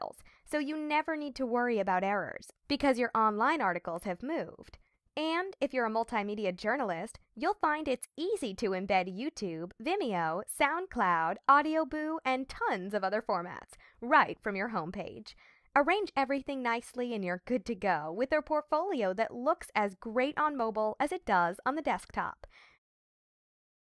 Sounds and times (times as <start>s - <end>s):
Speech: 0.0s - 22.5s.